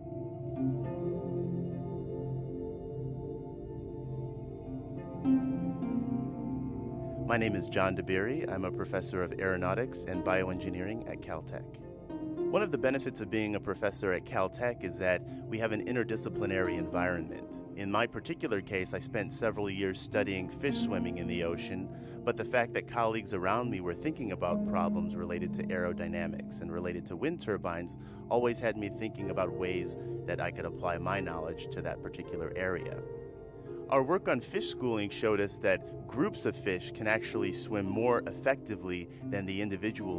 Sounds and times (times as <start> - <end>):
Music: 0.0 - 40.1
Speech: 7.3 - 11.7, 12.6 - 33.0, 33.9 - 40.1.